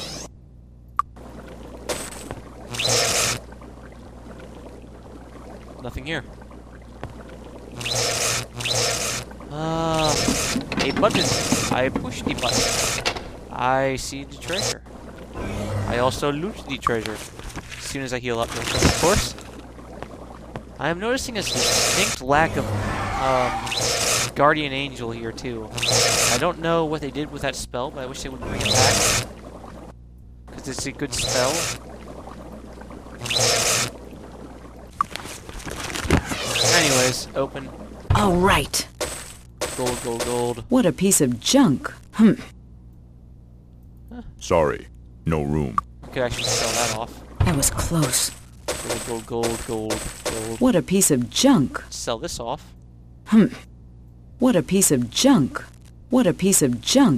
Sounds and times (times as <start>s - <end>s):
Speech: 5.8s - 6.3s, 10.8s - 12.6s, 15.4s - 17.2s, 20.8s - 23.6s, 26.4s - 29.0s, 39.8s - 42.5s, 44.2s - 48.3s, 48.9s - 52.7s, 54.4s - 57.1s.